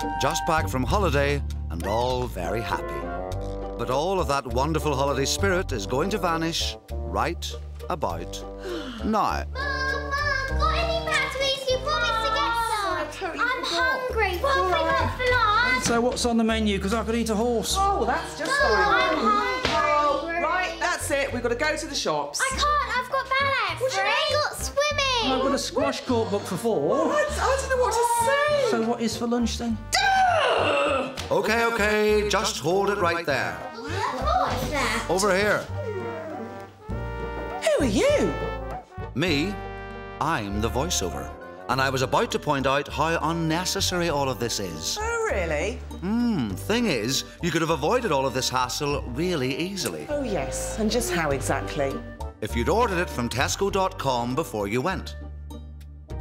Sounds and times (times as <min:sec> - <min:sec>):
Music: 0:00.0 - 0:56.2.